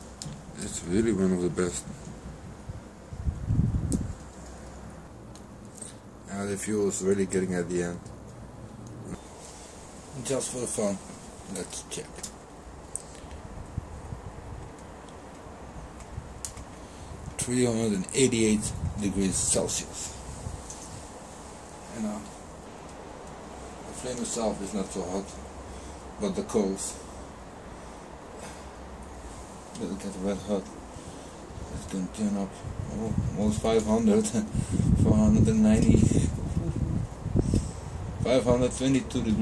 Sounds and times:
Speech: 0.6s - 1.9s, 6.3s - 8.0s, 10.2s - 12.3s, 17.4s - 20.2s, 21.9s - 22.3s, 23.9s - 25.4s, 26.2s - 27.0s, 29.8s - 30.7s, 31.7s - 36.8s, 38.2s - 39.4s.

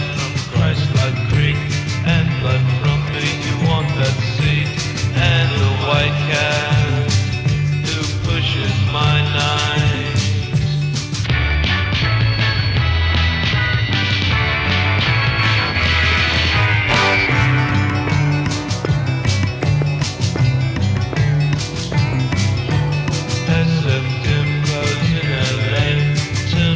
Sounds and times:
Music: 0.0s - 26.7s.

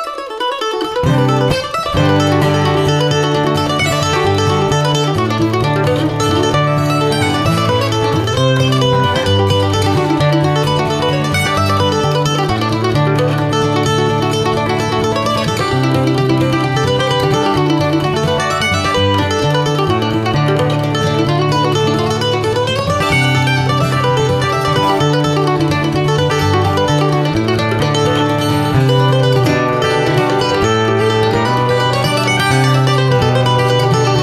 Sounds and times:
Mandolin: 0.0s - 34.2s.

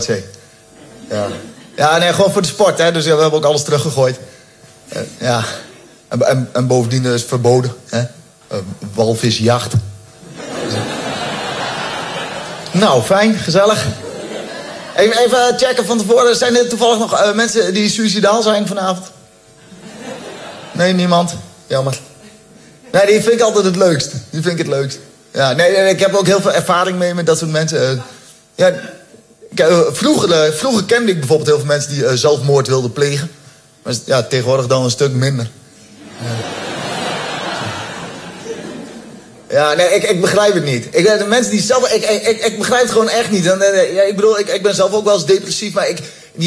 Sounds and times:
Speech: 0.0s - 0.4s, 1.1s - 4.3s, 4.9s - 9.9s, 12.7s - 14.0s, 15.0s - 19.2s, 20.8s - 22.1s, 22.9s - 35.6s, 39.5s - 46.4s.

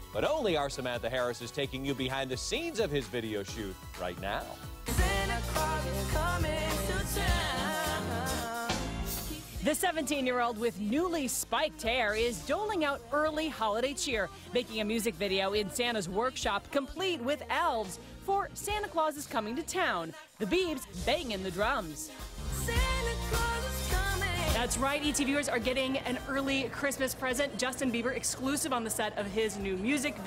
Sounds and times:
Music: 0.0s - 30.2s
Speech: 0.2s - 4.6s, 9.6s - 22.1s.

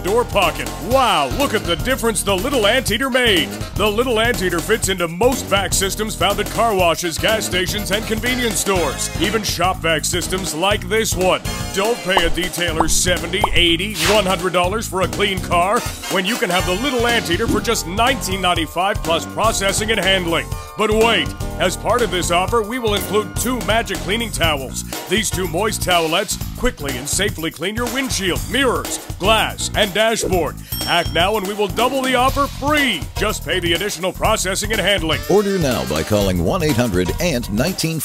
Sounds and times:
Music: 0.0s - 38.0s
Speech: 0.0s - 38.0s.

